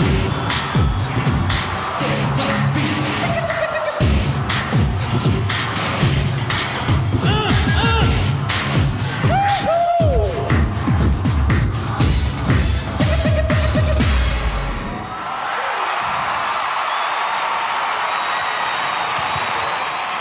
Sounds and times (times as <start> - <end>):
Pop music: 0.0 - 15.0.